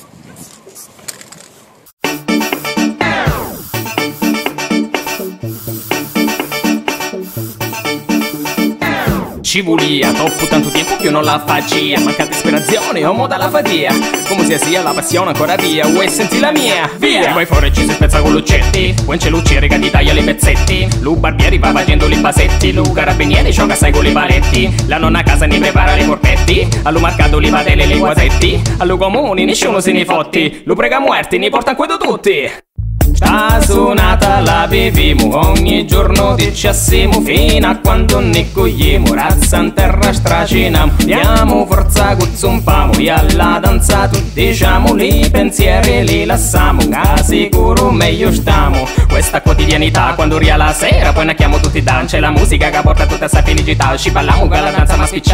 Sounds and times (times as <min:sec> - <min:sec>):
Music: 0:02.0 - 0:30.4, 0:32.8 - 0:55.3.